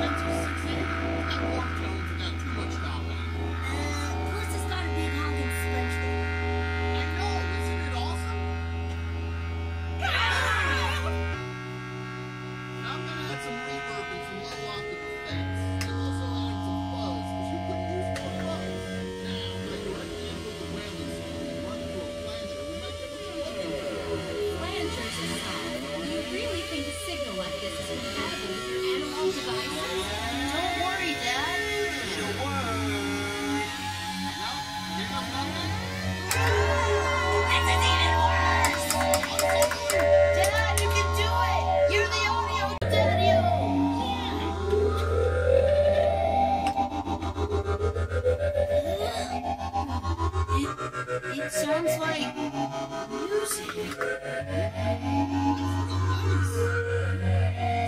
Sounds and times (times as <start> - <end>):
Speech: 0.0 - 8.4, 12.8 - 44.9, 48.8 - 49.6, 50.5 - 56.8
Music: 0.0 - 57.8.